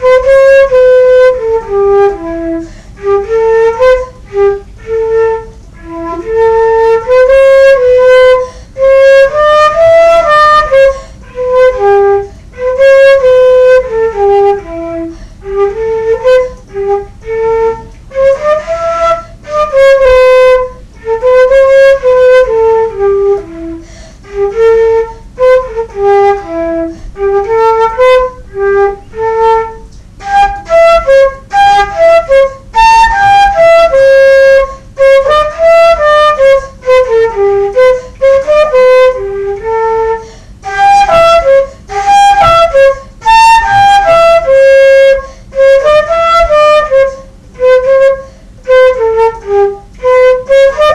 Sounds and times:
Flute: 0.0 - 50.9.

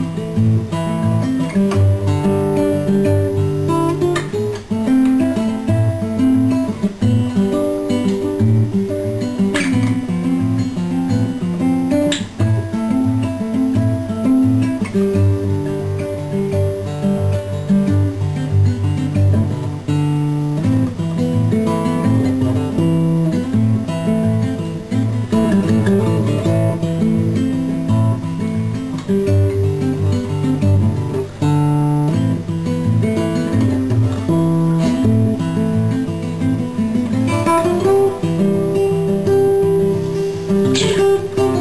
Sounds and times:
Acoustic guitar: 0.0 - 41.6.

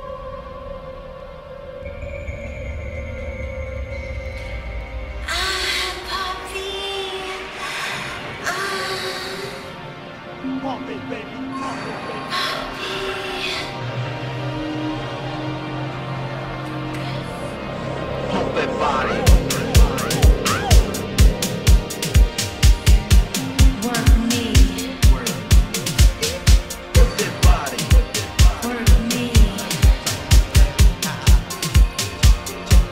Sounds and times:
Music: 0.0 - 32.9.

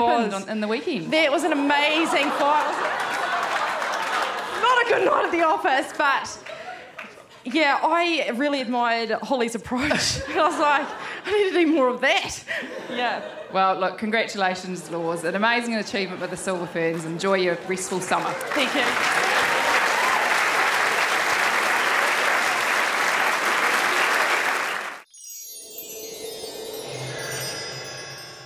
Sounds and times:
Applause: 1.9 - 5.2, 6.4 - 7.2, 18.1 - 25.1.

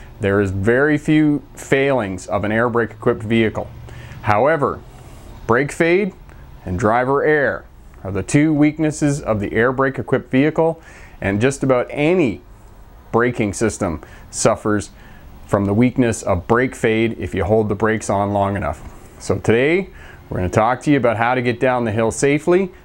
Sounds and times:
Speech: 0.2 - 4.8, 5.5 - 12.5, 13.1 - 22.8.

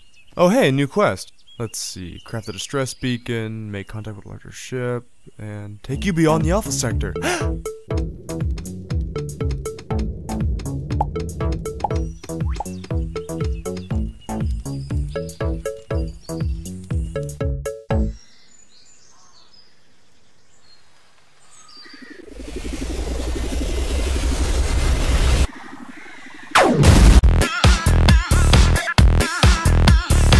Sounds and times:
Chirp, tweet: 0.0 - 6.4, 11.8 - 17.4, 18.1 - 22.4.

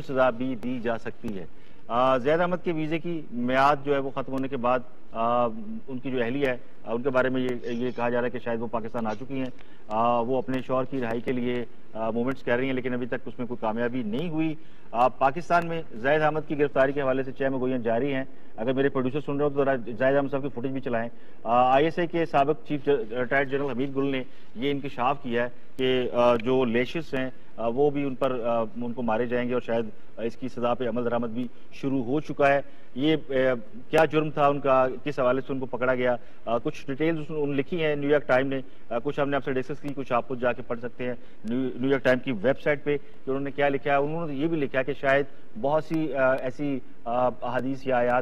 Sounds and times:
Speech: 0.0 - 48.2.

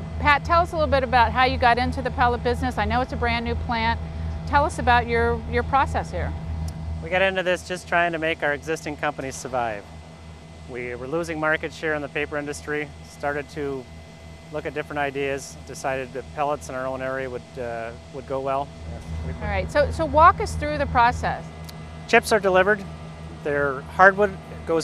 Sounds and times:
Speech: 0.2 - 6.3, 7.0 - 9.8, 10.7 - 13.9, 14.6 - 18.7, 19.3 - 21.4, 22.1 - 24.8.

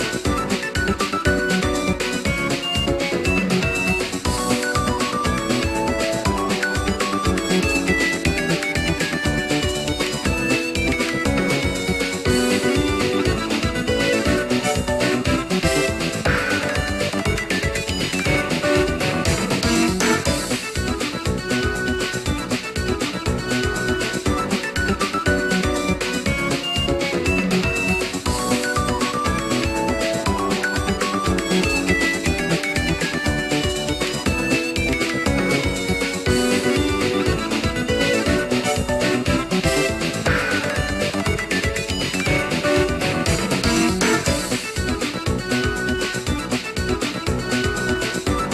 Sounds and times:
Theme music: 0.0 - 48.5.

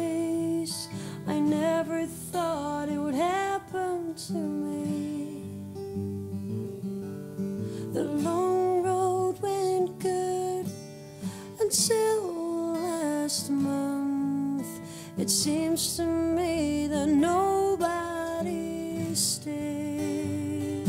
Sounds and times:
Music: 0.0 - 20.8.

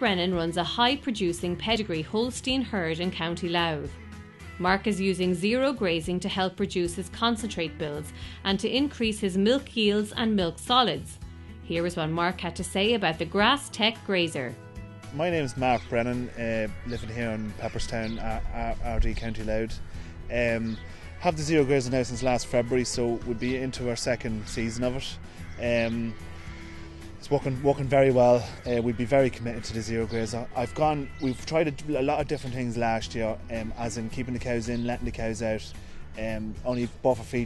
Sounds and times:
Speech: 0.0 - 3.9, 4.6 - 14.5, 15.2 - 26.2, 27.2 - 37.4
Music: 0.0 - 37.4.

